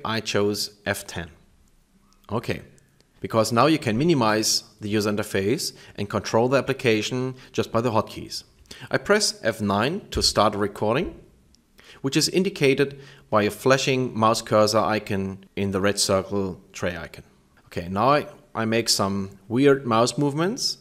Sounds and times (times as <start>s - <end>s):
Speech: 0.0s - 1.5s, 2.3s - 11.3s, 12.0s - 20.8s.